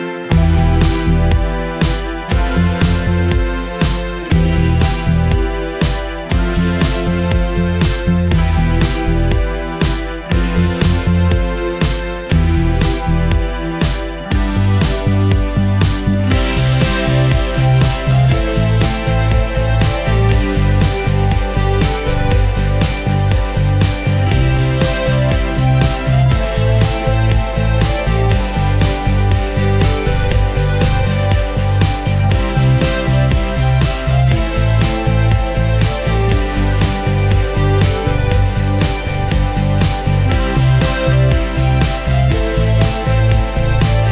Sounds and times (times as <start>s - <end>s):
Music: 0.0s - 44.1s.